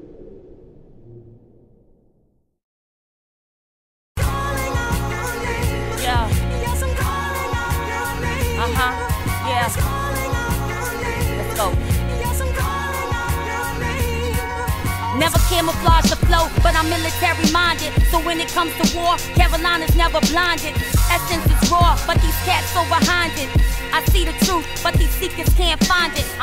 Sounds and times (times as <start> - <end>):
Music: 4.2 - 26.4.